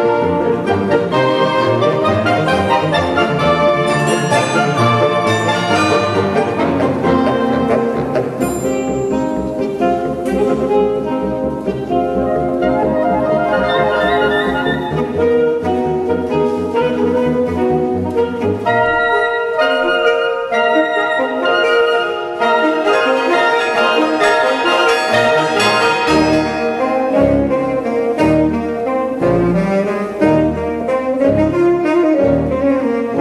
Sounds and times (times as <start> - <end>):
Percussion: 0.0 - 30.8.